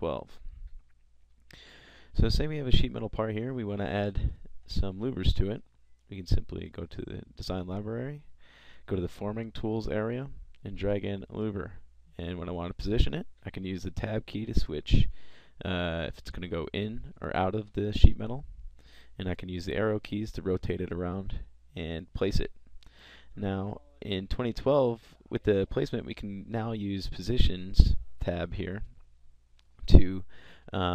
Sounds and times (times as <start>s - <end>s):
Speech: 0.0s - 0.5s, 2.2s - 8.3s, 8.9s - 18.5s, 19.2s - 22.5s, 23.4s - 28.9s, 29.9s - 30.9s.